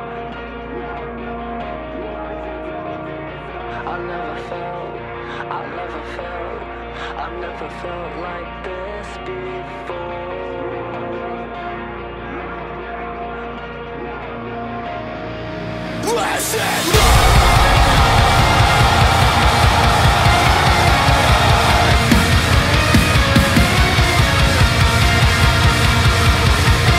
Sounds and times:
Music: 0.0 - 26.9.

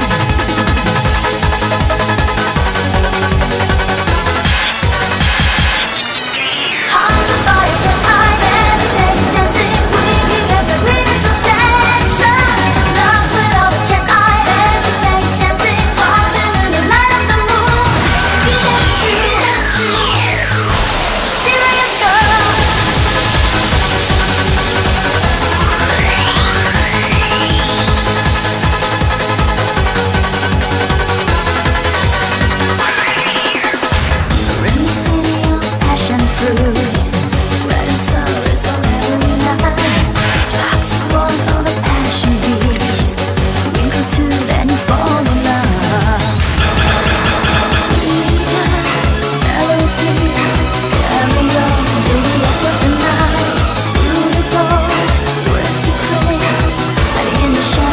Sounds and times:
Music: 0.0 - 57.9.

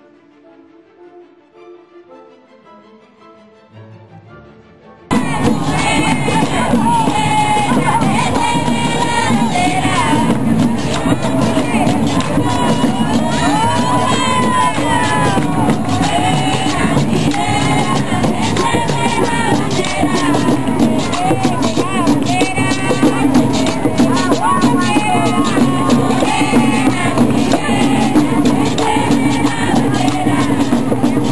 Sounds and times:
Music: 0.0 - 31.3.

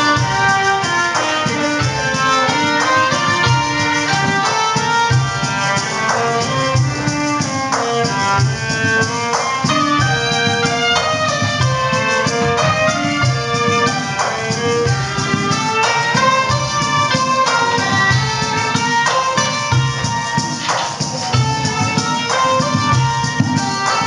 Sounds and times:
Musical instrument: 0.0 - 24.0.

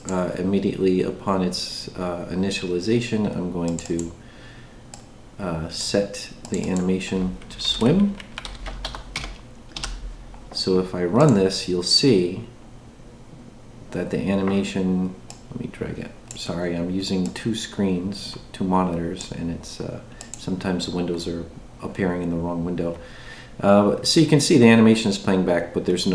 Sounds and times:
Speech: 0.0 - 4.2, 5.4 - 8.2, 10.6 - 12.6, 13.9 - 23.0, 23.6 - 26.1
Computer keyboard: 6.5 - 10.0.

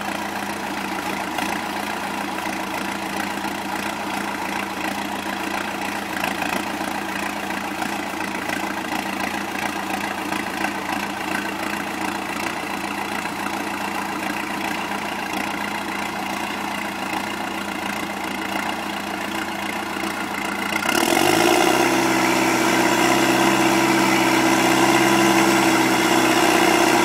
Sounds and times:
Vehicle: 0.0 - 27.0.

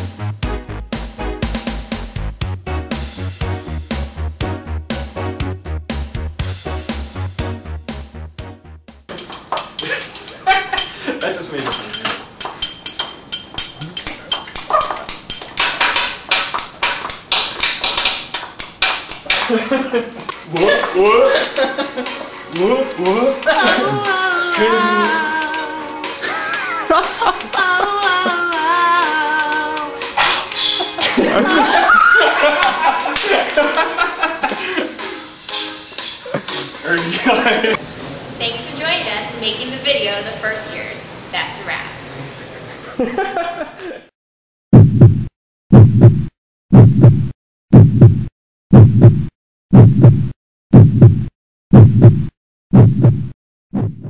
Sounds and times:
Heart murmur: 44.8 - 54.0.

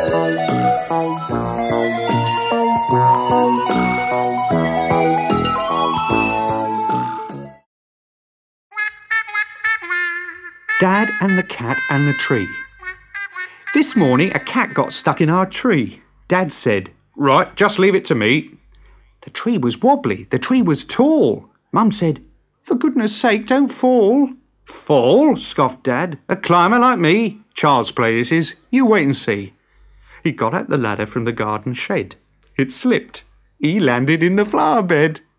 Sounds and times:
Speech: 10.8 - 12.6, 13.7 - 18.6, 19.2 - 29.6, 30.2 - 35.3.

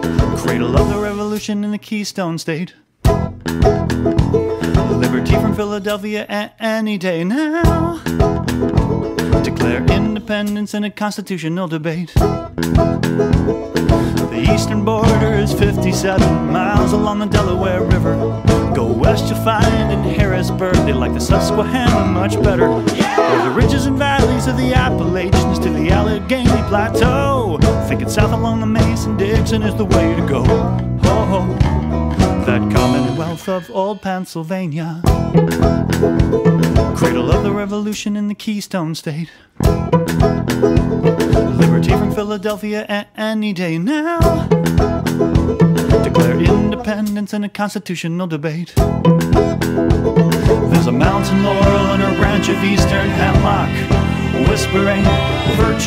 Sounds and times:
Happy music: 0.0 - 1.3, 3.1 - 6.0, 7.6 - 10.4, 12.2 - 34.5, 35.1 - 37.8, 39.6 - 42.4, 44.2 - 47.0, 48.8 - 55.8.

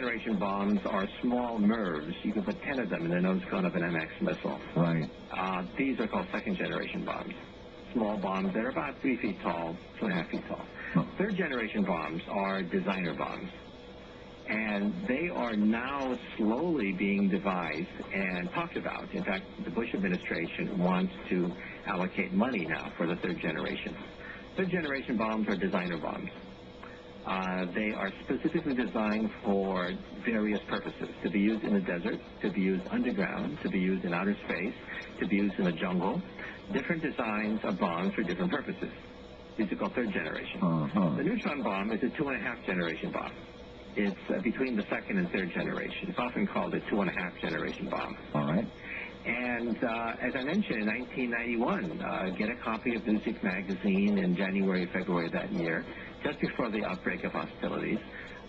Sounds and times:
Speech: 0.0 - 13.6, 14.5 - 26.4, 27.2 - 39.0, 39.6 - 43.4, 44.0 - 58.2.

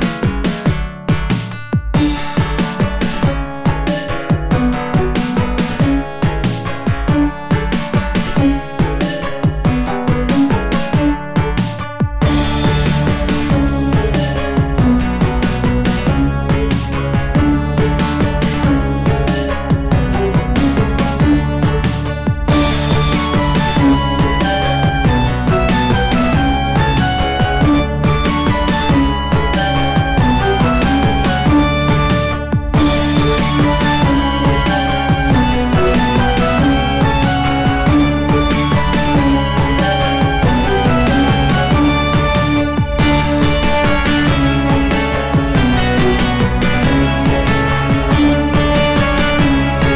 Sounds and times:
Music: 0.0 - 49.9.

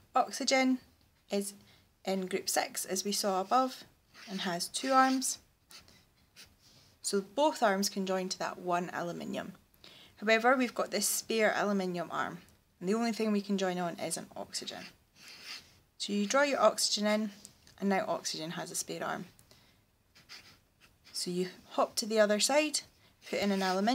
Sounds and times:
Speech: 0.2 - 5.4, 7.1 - 9.6, 10.2 - 15.0, 16.0 - 19.3, 21.2 - 23.9
Writing: 3.1 - 6.6, 14.6 - 16.5, 20.1 - 22.1, 22.8 - 23.9.

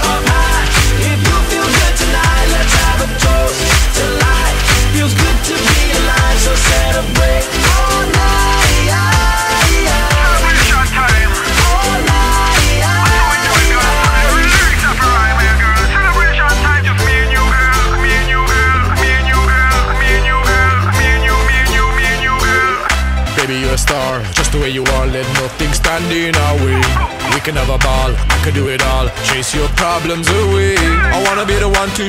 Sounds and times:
Hip hop music: 0.0 - 32.0.

